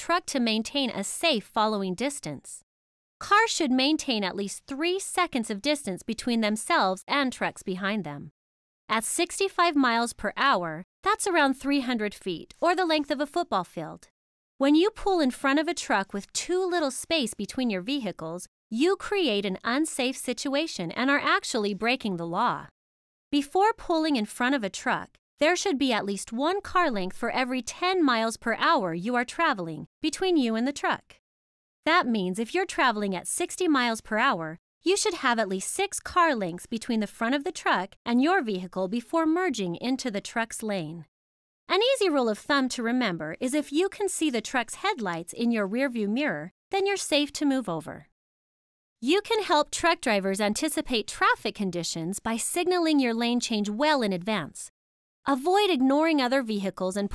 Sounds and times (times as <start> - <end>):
Speech: 0.0 - 2.6, 3.2 - 8.3, 8.9 - 22.7, 23.4 - 31.2, 31.9 - 41.1, 41.7 - 48.1, 49.0 - 54.7, 55.3 - 57.1.